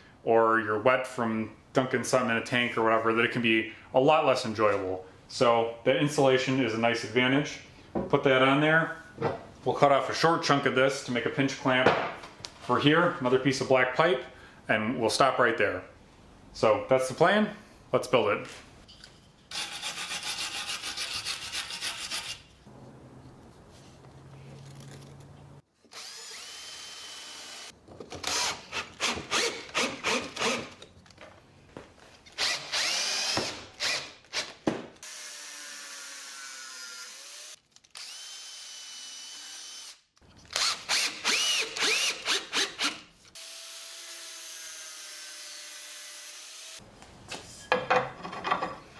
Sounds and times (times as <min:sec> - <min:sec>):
Rub: 0:19.9 - 0:22.5.